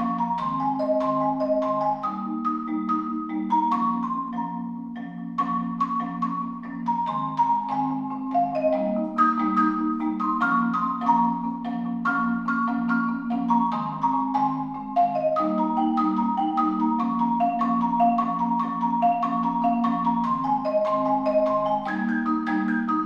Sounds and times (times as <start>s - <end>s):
Music: 0.0s - 23.0s.